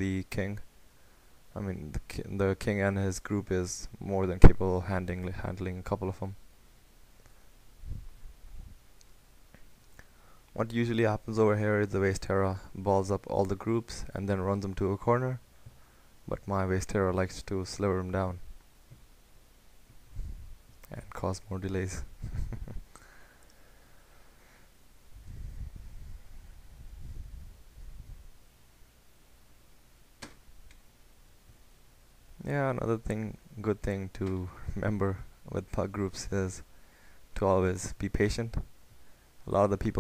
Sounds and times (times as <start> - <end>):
Narration, monologue: 0.0 - 27.4, 28.0 - 40.0.